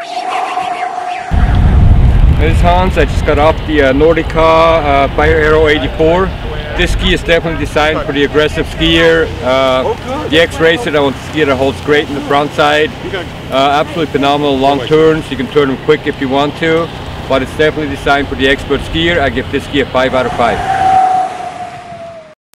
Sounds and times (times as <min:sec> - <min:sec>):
Speech: 0:02.4 - 0:20.6.